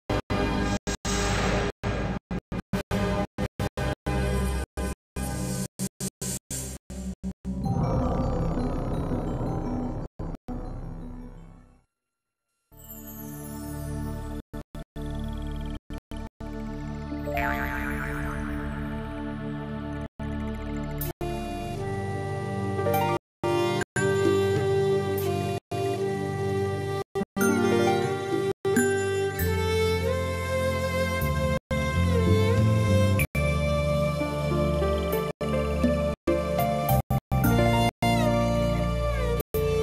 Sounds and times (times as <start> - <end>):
Music: 0.1 - 8.1, 9.5 - 14.4, 15.0 - 39.8.